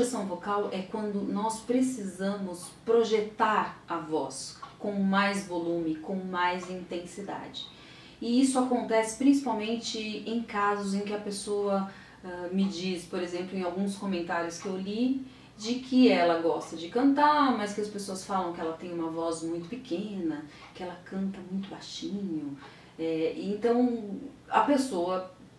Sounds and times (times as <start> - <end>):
Speech: 0.0 - 25.4.